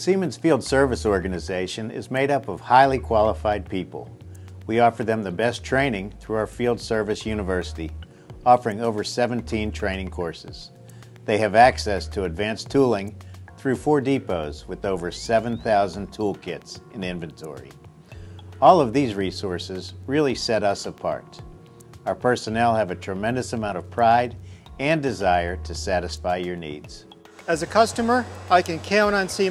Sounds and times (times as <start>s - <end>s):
Speech: 0.0s - 4.1s, 4.7s - 10.7s, 11.3s - 17.7s, 18.6s - 21.4s, 22.0s - 29.5s.